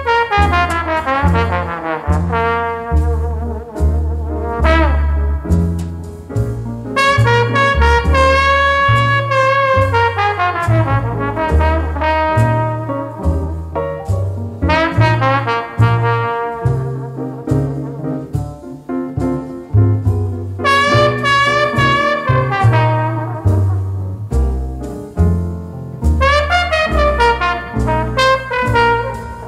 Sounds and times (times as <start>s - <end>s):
Trumpet: 0.0s - 6.0s, 6.9s - 25.0s, 26.0s - 29.4s
Jazz: 0.0s - 29.4s
Trombone: 0.0s - 29.4s.